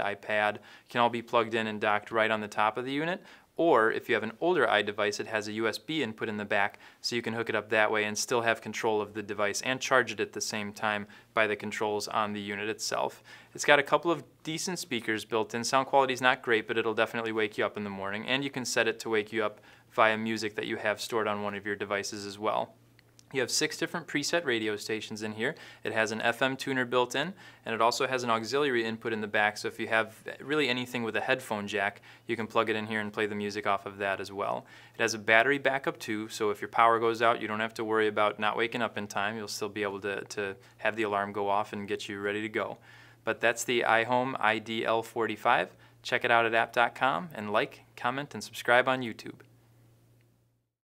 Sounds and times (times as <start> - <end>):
Speech: 0.0 - 49.5.